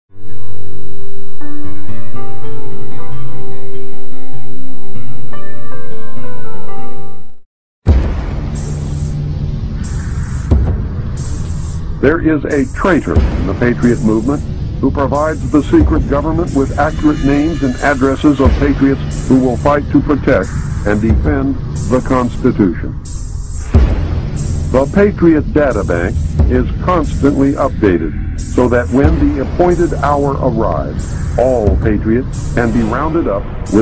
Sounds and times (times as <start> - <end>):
Music: 0.1 - 33.8.